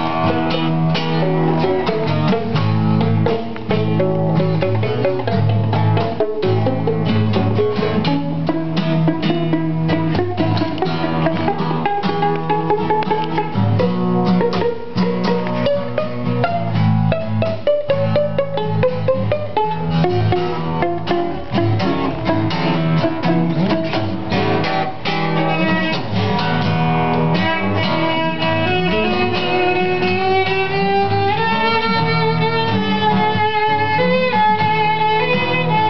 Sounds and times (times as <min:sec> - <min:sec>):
Acoustic guitar: 0:00.0 - 0:35.9
Pizzicato: 0:00.0 - 0:35.9.